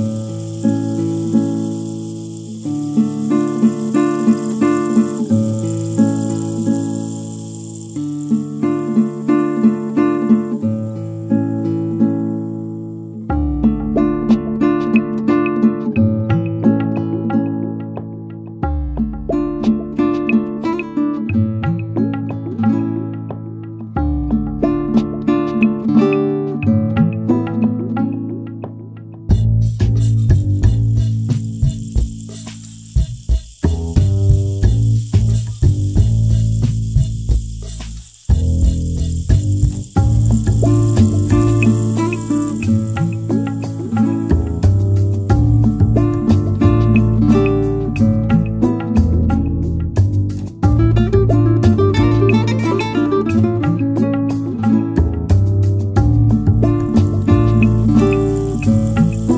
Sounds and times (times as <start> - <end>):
Guitar: 0.0 - 59.3.